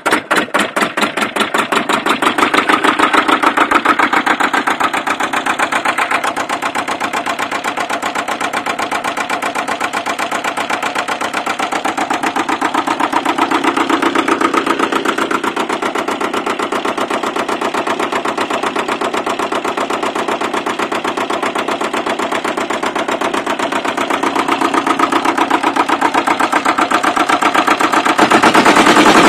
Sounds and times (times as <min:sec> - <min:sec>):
Idling: 0:00.0 - 0:29.2
Medium engine (mid frequency): 0:00.0 - 0:29.2.